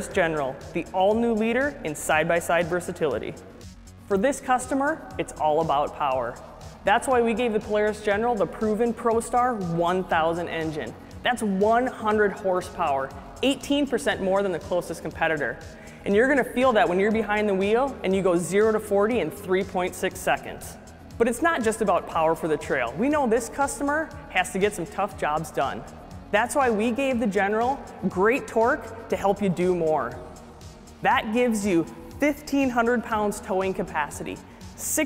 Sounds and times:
Speech: 0:00.0 - 0:03.4, 0:04.1 - 0:30.2, 0:31.0 - 0:35.0
Music: 0:00.0 - 0:35.0.

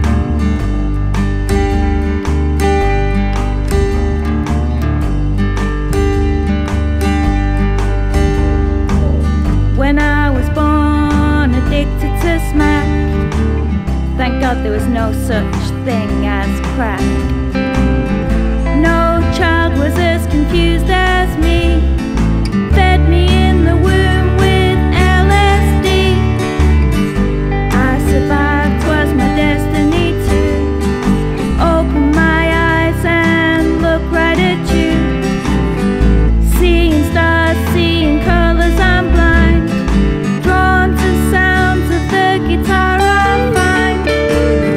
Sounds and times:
Rhythm and blues: 0:00.0 - 0:44.7.

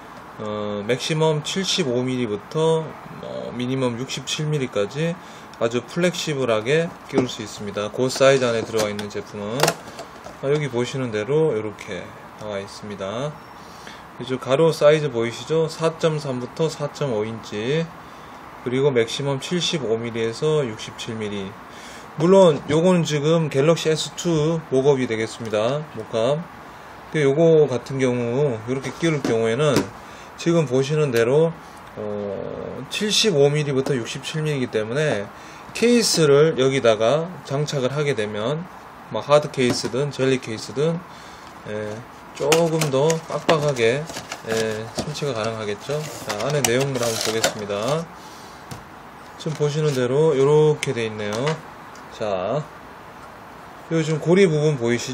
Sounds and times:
Speech: 0:00.4 - 0:09.7, 0:10.4 - 0:13.4, 0:14.2 - 0:18.0, 0:18.6 - 0:21.6, 0:22.2 - 0:26.5, 0:27.1 - 0:41.1, 0:41.7 - 0:48.1, 0:49.4 - 0:52.7, 0:53.9 - 0:55.1.

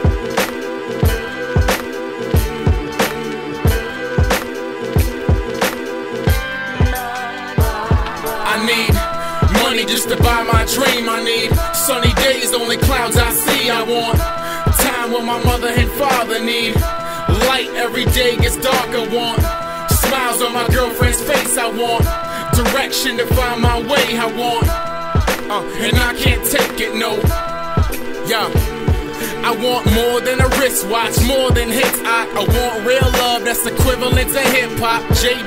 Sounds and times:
Blues: 0:00.0 - 0:35.4
Rhythm and blues: 0:00.0 - 0:35.4.

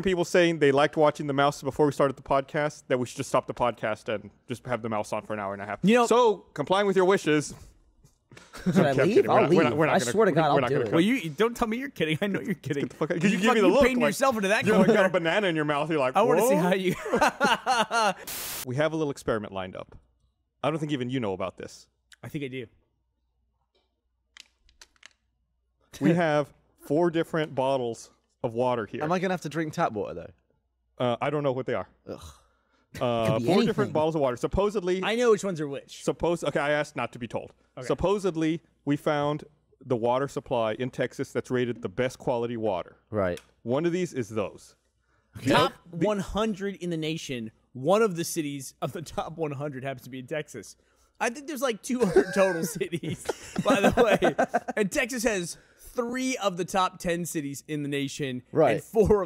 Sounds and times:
Speech: 0:00.0 - 0:07.6, 0:08.7 - 0:17.0, 0:18.7 - 0:20.0, 0:20.6 - 0:22.8, 0:26.0 - 0:30.4, 0:31.0 - 0:32.4, 0:33.0 - 0:44.8, 0:45.4 - 0:59.2.

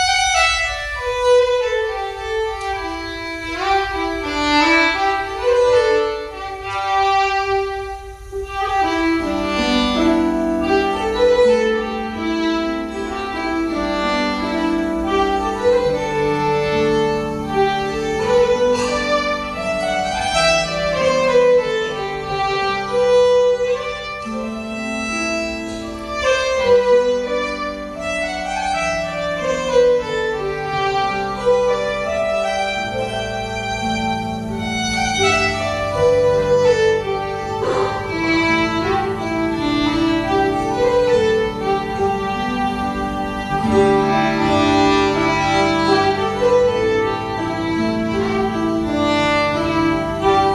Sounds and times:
Violin, fiddle: 0:00.0 - 0:50.5.

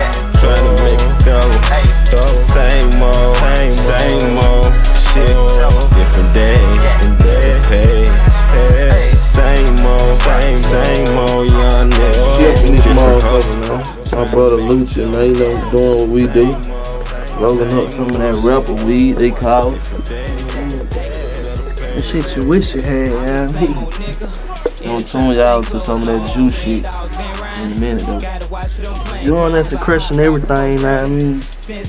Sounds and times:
Music: 0:00.0 - 0:31.8
Speech: 0:12.3 - 0:16.6, 0:17.4 - 0:20.9, 0:22.0 - 0:24.0, 0:24.8 - 0:26.8, 0:27.5 - 0:28.3, 0:29.1 - 0:31.5.

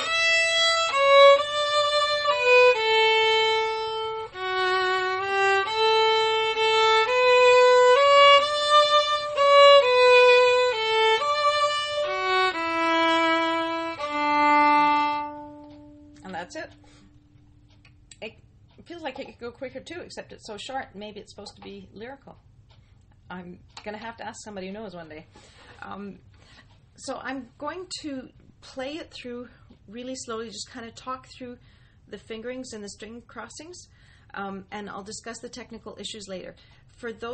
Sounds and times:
Speech: 0:16.2 - 0:16.8, 0:18.2 - 0:22.4, 0:23.3 - 0:26.2, 0:27.0 - 0:37.3.

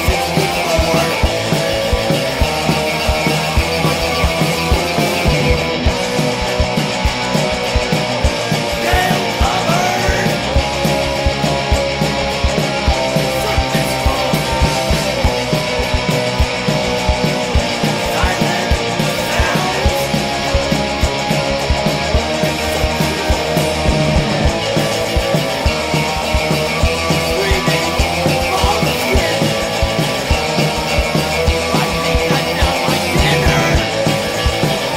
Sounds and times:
Electric guitar: 0:00.0 - 0:34.9.

